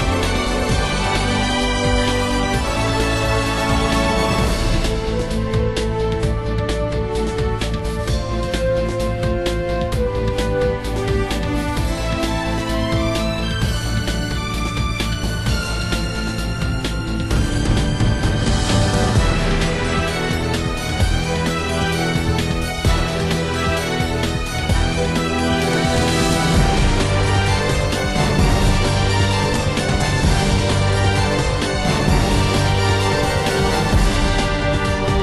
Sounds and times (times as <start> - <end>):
Theme music: 0.0 - 35.2.